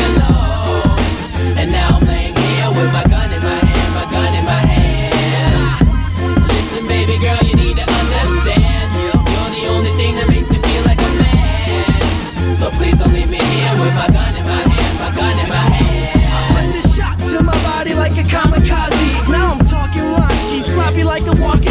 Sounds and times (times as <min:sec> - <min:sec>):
Music: 0:00.0 - 0:21.7.